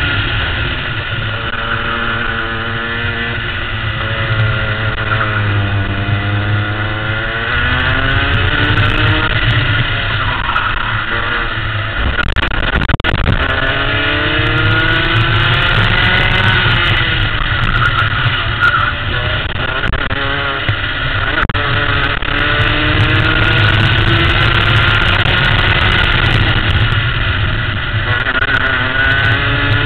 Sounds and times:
Race car, auto racing: 0.0s - 29.8s.

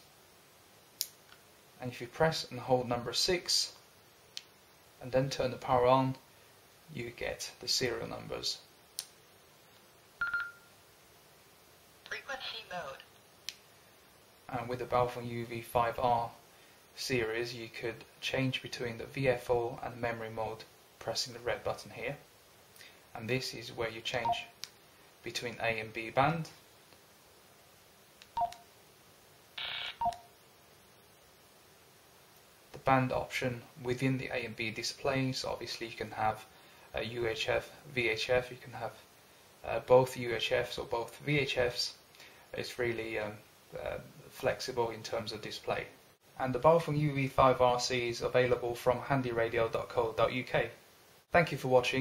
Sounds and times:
Inside, small room: 0.0s - 52.0s
Speech: 1.8s - 3.8s, 5.0s - 6.2s, 6.9s - 8.7s, 12.1s - 13.1s, 14.5s - 16.4s, 17.0s - 22.2s, 23.2s - 24.5s, 25.2s - 26.6s, 32.8s - 39.0s, 39.6s - 52.0s.

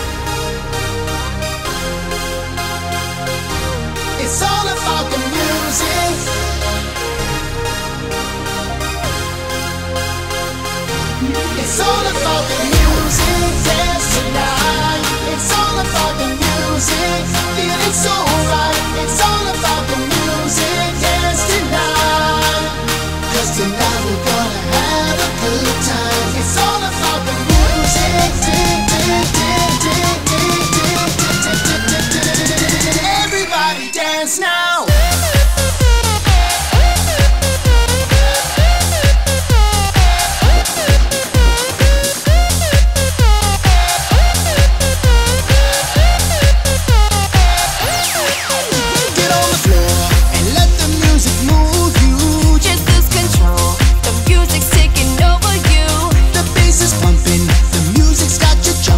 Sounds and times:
Music: 0.0s - 58.9s.

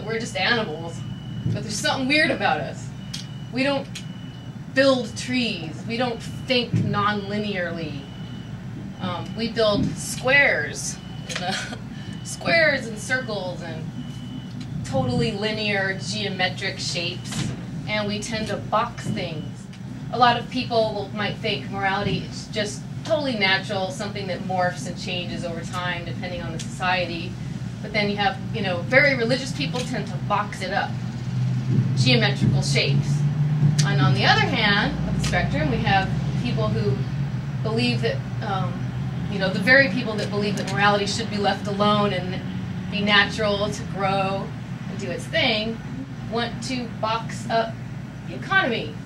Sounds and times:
Speech: 0.0s - 2.9s, 9.0s - 11.6s, 14.9s - 19.5s, 20.2s - 30.9s, 32.0s - 33.2s, 33.8s - 37.0s, 37.7s - 49.0s.

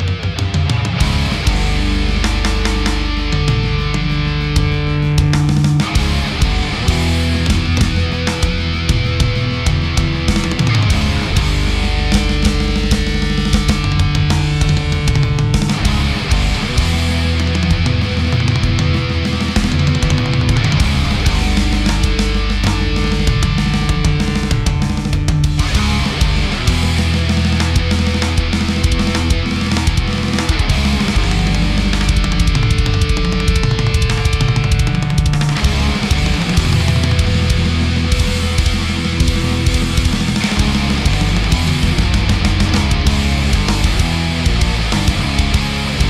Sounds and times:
Music: 0.0s - 46.1s.

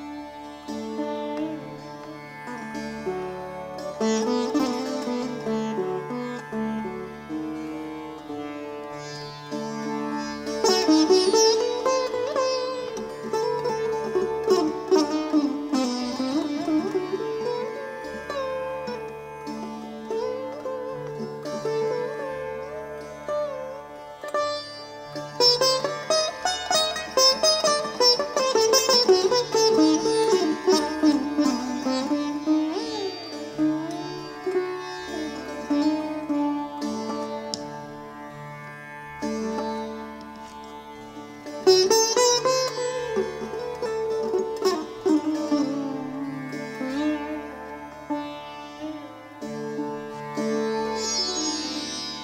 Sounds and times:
Sitar: 0.0s - 52.2s.

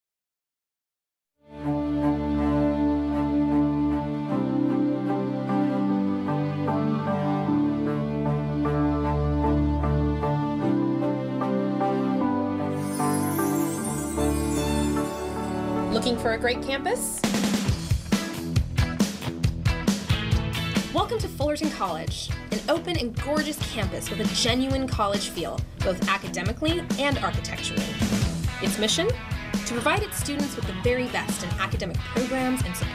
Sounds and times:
Background music: 1.4s - 32.9s.

